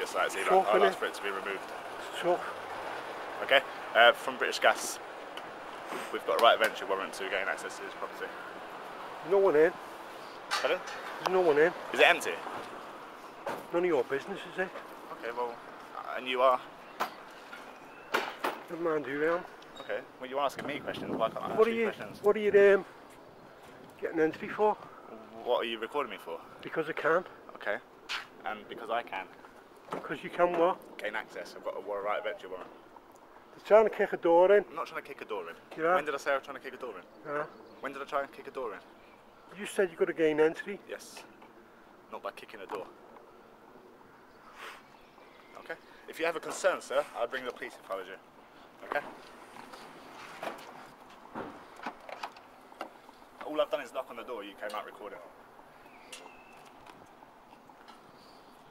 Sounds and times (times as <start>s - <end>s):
Speech: 0.0s - 2.6s, 3.4s - 5.0s, 6.1s - 8.4s, 9.2s - 9.8s, 10.6s - 12.4s, 13.7s - 16.6s, 18.7s - 22.9s, 24.0s - 27.8s, 28.4s - 29.4s, 30.0s - 32.7s, 33.6s - 38.8s, 39.5s - 41.3s, 42.1s - 42.9s, 45.6s - 48.2s, 48.8s - 49.1s, 53.4s - 55.3s.